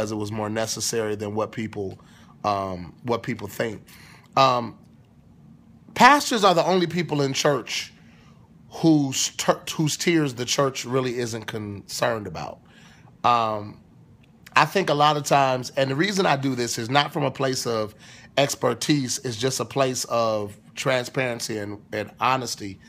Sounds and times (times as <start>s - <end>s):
Speech: 0.0s - 4.8s, 6.0s - 8.0s, 8.7s - 12.6s, 13.2s - 13.8s, 14.5s - 22.8s.